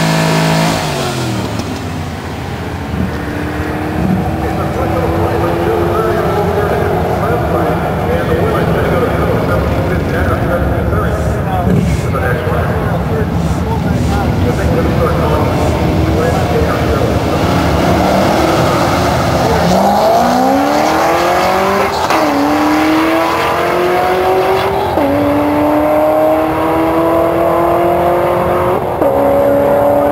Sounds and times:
Car: 0.0s - 30.1s.

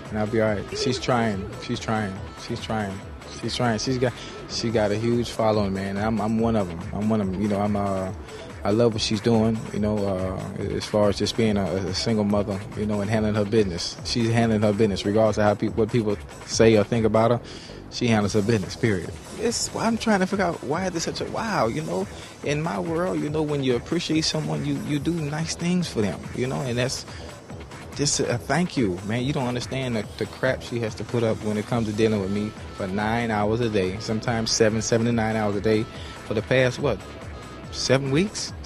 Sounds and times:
Speech: 0.0s - 27.1s, 28.0s - 37.0s, 37.7s - 38.6s
Music: 0.0s - 38.6s.

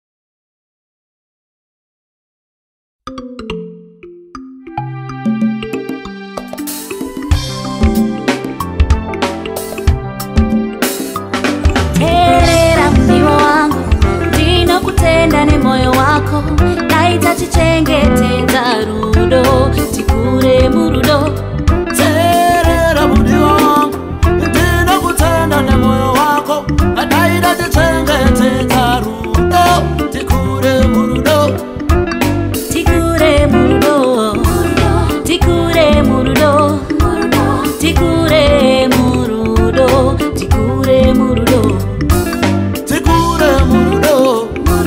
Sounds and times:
Music: 3.1s - 44.8s.

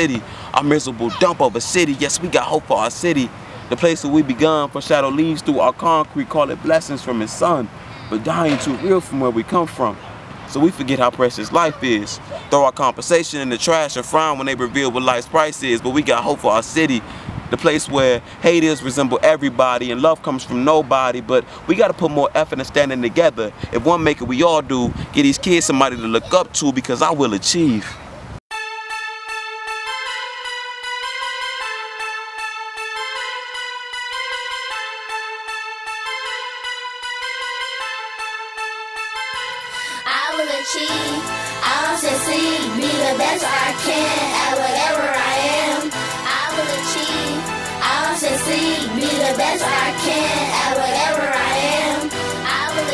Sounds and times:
Speech: 0.0s - 28.0s.

